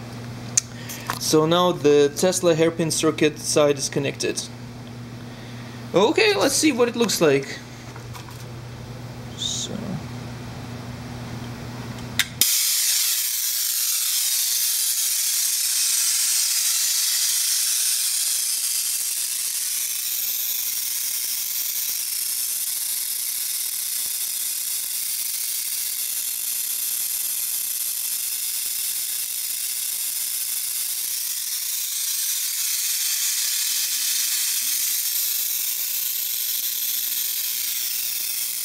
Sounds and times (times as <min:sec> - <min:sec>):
Inside, small room: 0:11.2 - 0:38.6.